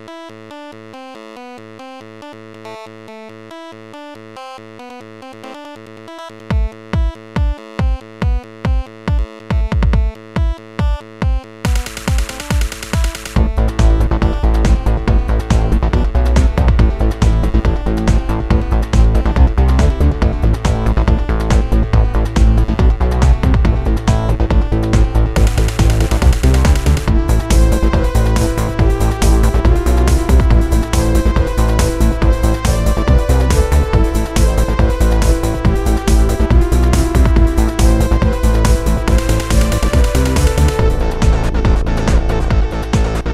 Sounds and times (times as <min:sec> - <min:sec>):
Music: 0:00.0 - 0:43.3.